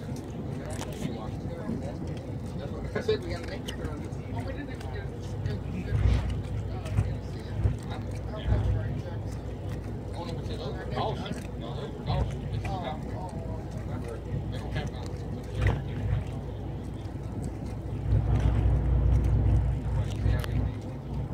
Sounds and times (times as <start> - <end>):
Speech: 0.0 - 18.6, 19.6 - 21.3.